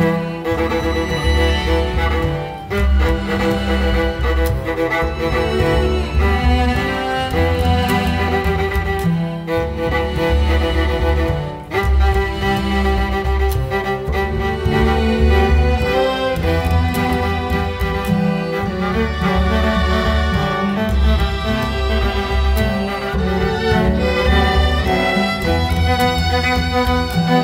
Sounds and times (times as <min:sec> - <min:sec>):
Music: 0:00.0 - 0:27.4.